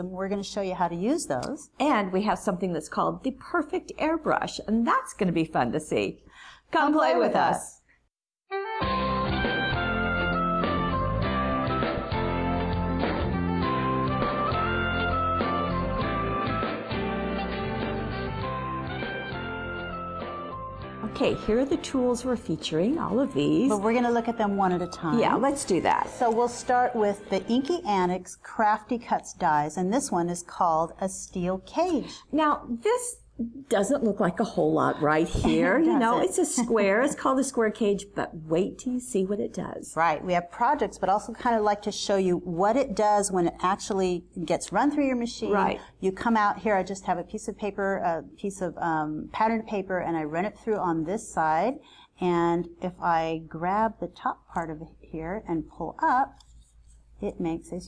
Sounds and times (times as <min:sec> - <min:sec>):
Speech: 0:00.0 - 0:07.8, 0:21.0 - 0:56.4, 0:57.2 - 0:57.8
Music: 0:08.5 - 0:28.4.